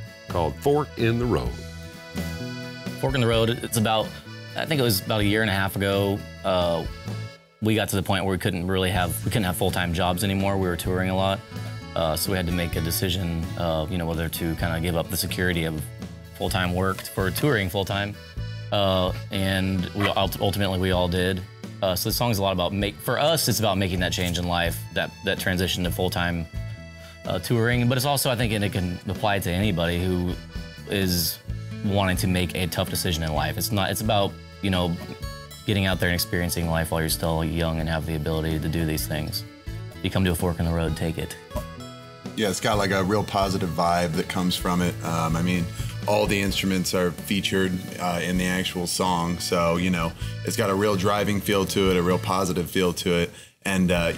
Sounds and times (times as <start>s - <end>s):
Music: 0.0s - 54.1s
Speech: 0.3s - 1.6s, 3.0s - 6.9s, 7.6s - 11.4s, 12.0s - 18.2s, 18.8s - 26.5s, 27.3s - 41.4s, 42.4s - 54.1s.